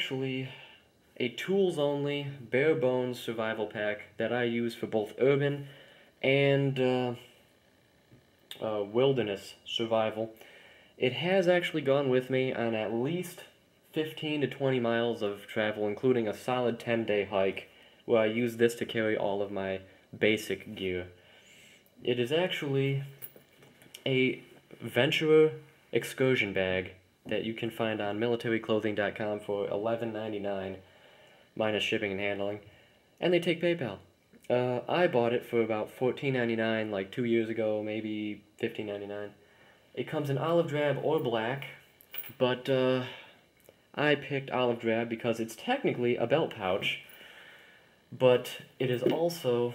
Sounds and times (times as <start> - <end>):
Speech: 0.0 - 0.6, 1.2 - 7.3, 8.5 - 10.4, 11.0 - 21.2, 22.0 - 23.2, 24.0 - 30.8, 31.6 - 39.4, 40.0 - 47.1, 48.1 - 49.7.